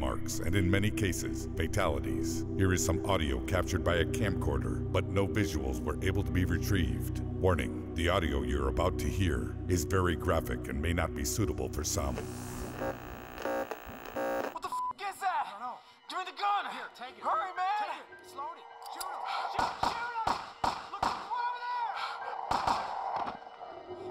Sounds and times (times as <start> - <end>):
Speech: 0.0 - 12.2, 14.6 - 20.3, 20.9 - 22.2.